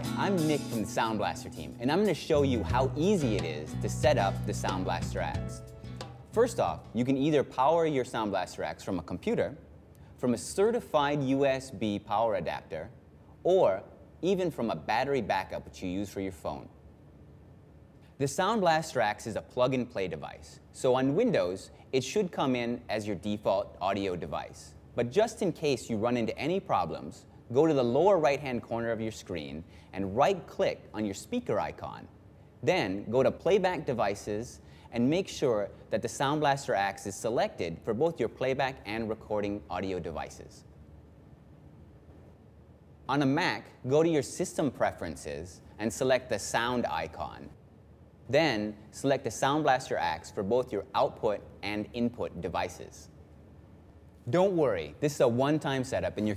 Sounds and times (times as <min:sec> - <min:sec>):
Speech: 0:00.0 - 0:05.6, 0:06.3 - 0:09.6, 0:10.2 - 0:16.8, 0:18.2 - 0:40.7, 0:43.1 - 0:47.6, 0:48.3 - 0:53.2, 0:54.3 - 0:56.3.